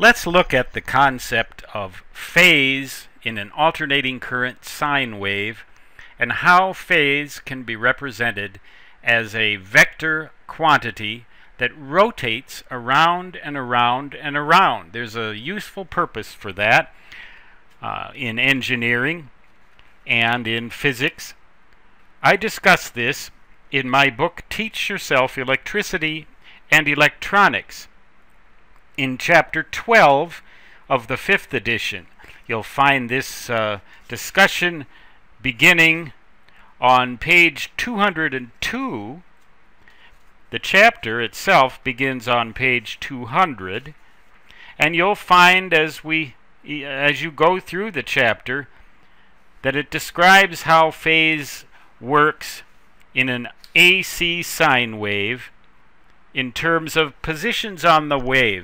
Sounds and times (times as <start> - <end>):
Speech: 0.0 - 17.0, 17.8 - 19.4, 20.0 - 21.4, 22.2 - 27.9, 29.0 - 36.2, 36.8 - 39.3, 40.5 - 44.0, 44.8 - 48.8, 49.6 - 55.6, 56.4 - 58.6.